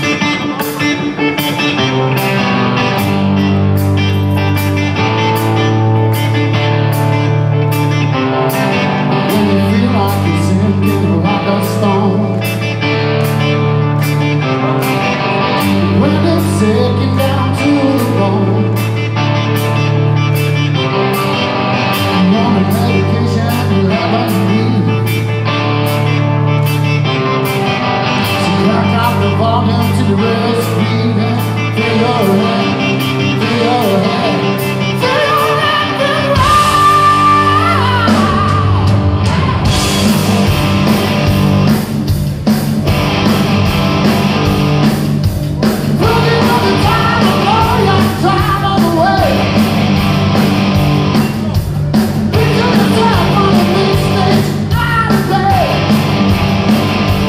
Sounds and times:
Music: 0:00.0 - 0:57.2.

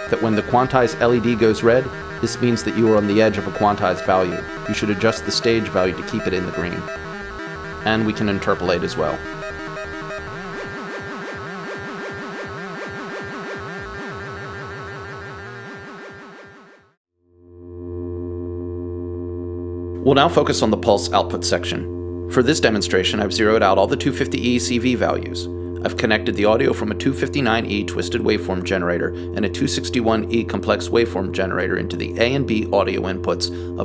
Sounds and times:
Speech: 0:00.0 - 0:06.9, 0:07.8 - 0:09.2, 0:20.0 - 0:33.8.

